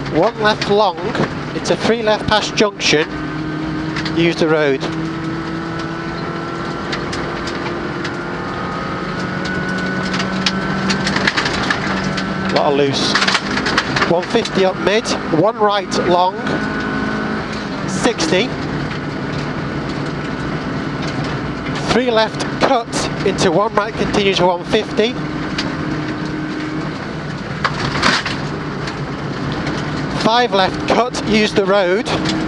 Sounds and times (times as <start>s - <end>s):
Speech: 0.1s - 3.1s, 4.2s - 4.9s, 12.5s - 13.2s, 14.1s - 16.5s, 17.9s - 18.5s, 21.8s - 25.2s, 30.2s - 32.2s.